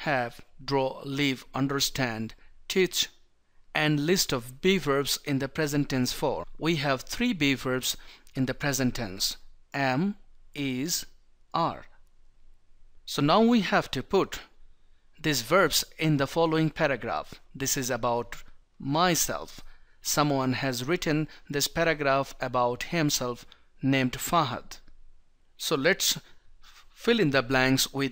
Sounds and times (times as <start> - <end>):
Speech: 0.0 - 3.1, 3.8 - 11.9, 13.1 - 14.5, 15.2 - 24.8, 25.6 - 26.3, 27.0 - 28.1.